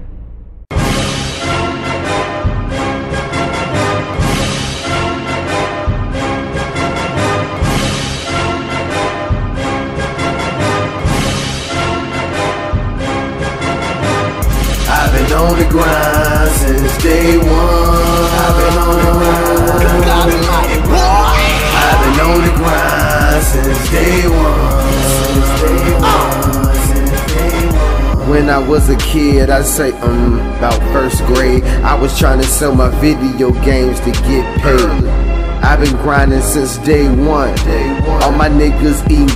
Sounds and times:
Dance music: 14.4 - 39.3.

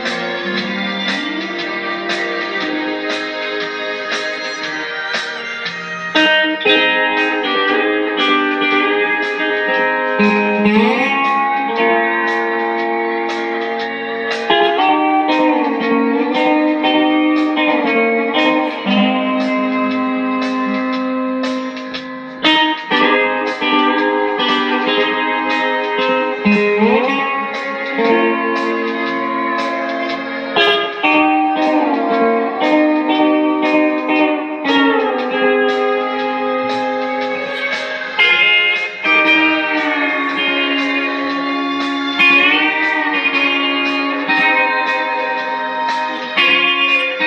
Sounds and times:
Strum: 0.0 - 47.2.

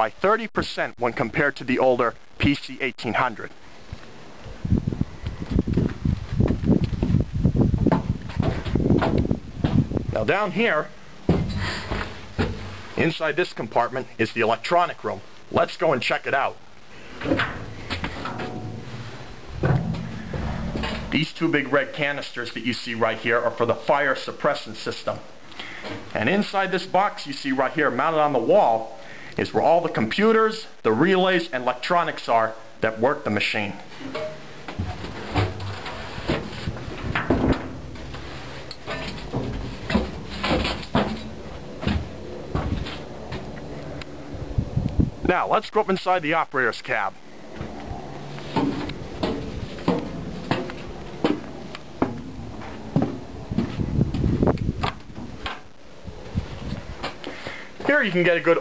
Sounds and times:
Speech: 0.0 - 3.6, 10.1 - 11.0, 13.0 - 16.6, 21.1 - 25.3, 26.1 - 33.9, 45.2 - 47.2, 57.8 - 58.6.

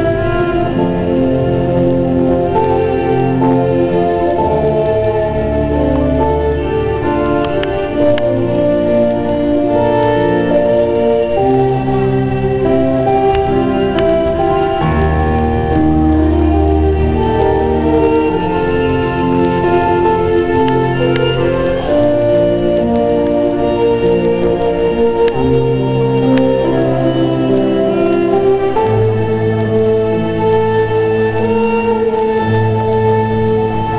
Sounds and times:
Violin, fiddle: 0.0 - 33.9.

